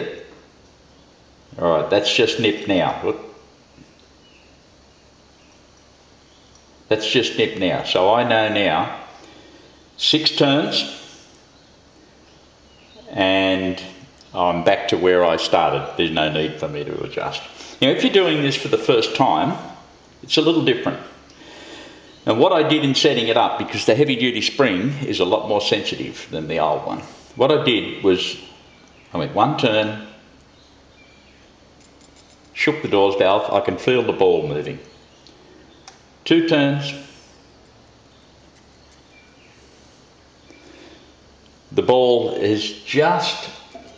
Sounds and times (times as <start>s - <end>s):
Speech: 0.0s - 0.3s, 1.6s - 3.4s, 6.9s - 9.2s, 10.0s - 11.2s, 13.0s - 21.2s, 22.2s - 30.2s, 32.6s - 34.9s, 36.2s - 37.2s, 41.7s - 43.9s.